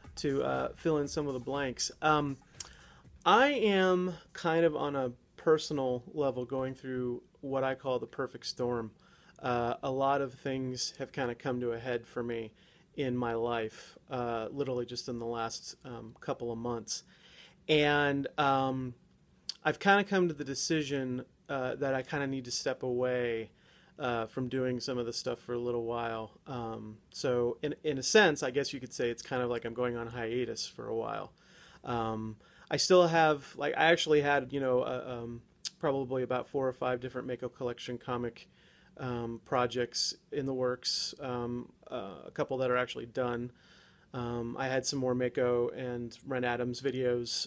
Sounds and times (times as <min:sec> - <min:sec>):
Speech: 0:00.0 - 0:17.1, 0:17.7 - 0:47.4.